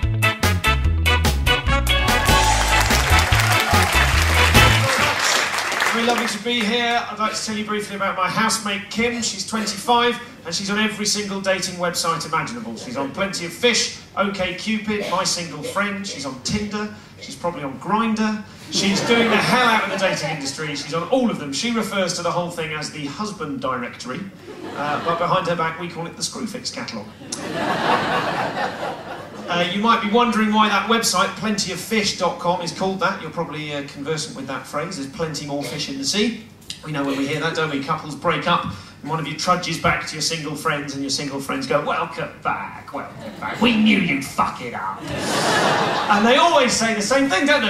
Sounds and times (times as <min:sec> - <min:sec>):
Speech: 0:04.6 - 0:27.1, 0:29.5 - 0:45.0, 0:46.1 - 0:47.6.